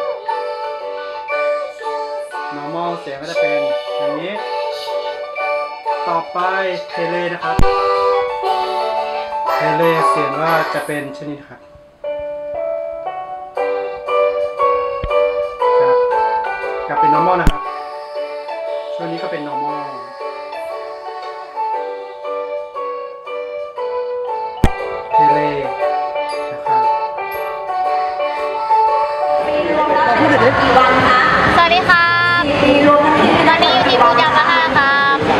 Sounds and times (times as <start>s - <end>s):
Music: 0.0s - 35.3s.